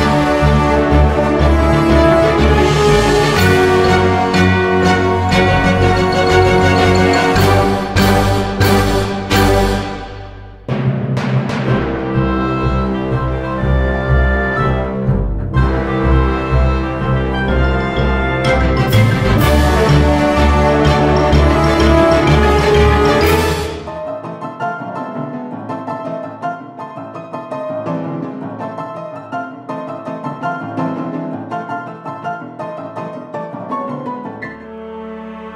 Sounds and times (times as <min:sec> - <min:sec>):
Timpani: 0:00.0 - 0:35.5.